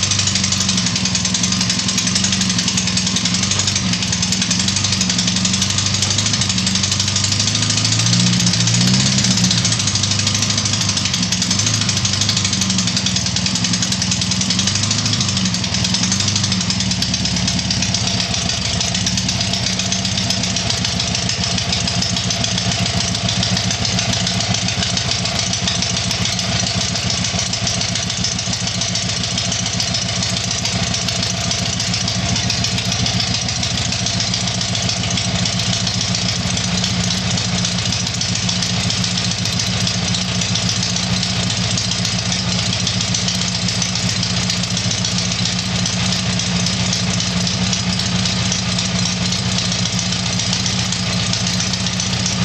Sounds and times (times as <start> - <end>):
Heavy engine (low frequency): 0.0 - 52.4
Vehicle: 0.0 - 52.4.